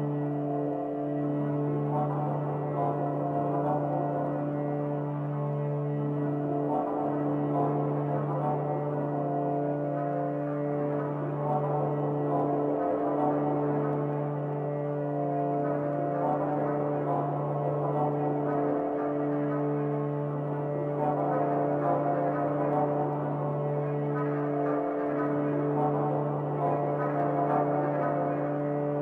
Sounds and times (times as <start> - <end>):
Music: 0.0 - 29.0.